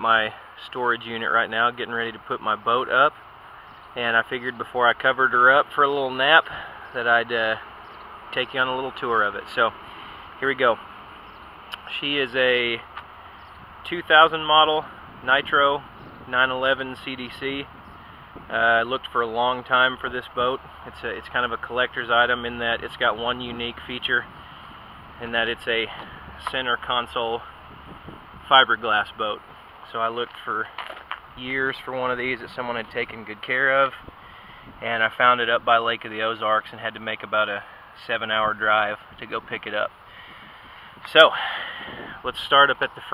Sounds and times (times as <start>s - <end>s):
Speech: 0.0s - 3.2s, 4.0s - 7.6s, 8.3s - 9.8s, 10.4s - 10.8s, 11.8s - 12.9s, 13.8s - 17.7s, 18.5s - 24.3s, 25.2s - 27.5s, 28.5s - 30.8s, 31.4s - 34.0s, 34.8s - 39.9s, 41.1s - 41.4s, 42.2s - 43.1s.